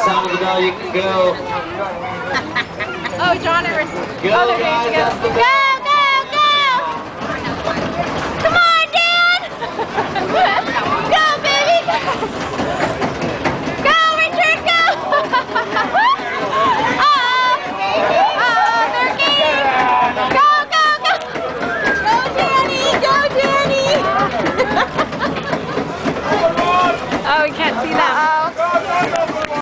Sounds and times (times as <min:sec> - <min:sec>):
Vehicle: 0:00.0 - 0:29.6.